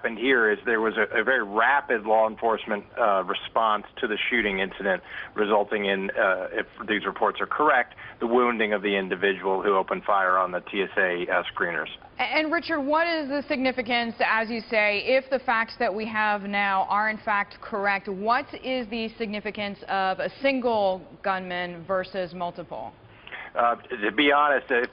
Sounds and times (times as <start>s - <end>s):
Speech: 0.0s - 24.9s.